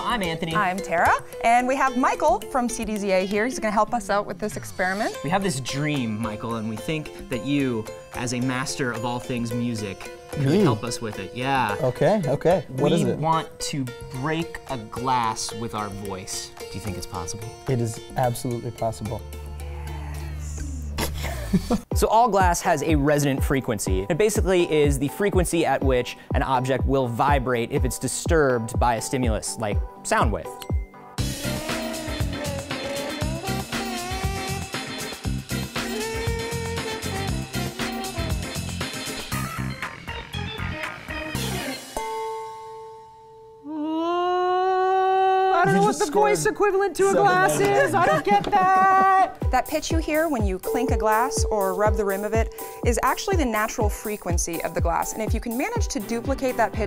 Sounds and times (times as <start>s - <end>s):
Music: 0.0s - 43.7s, 45.5s - 56.8s.